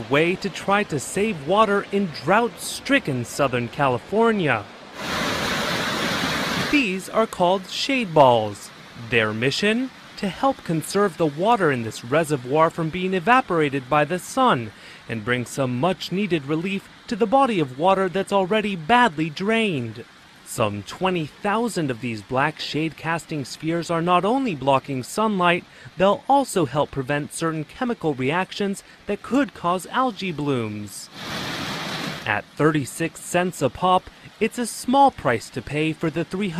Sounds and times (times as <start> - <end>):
Speech: 0.0 - 4.7, 6.7 - 31.1, 32.3 - 36.5.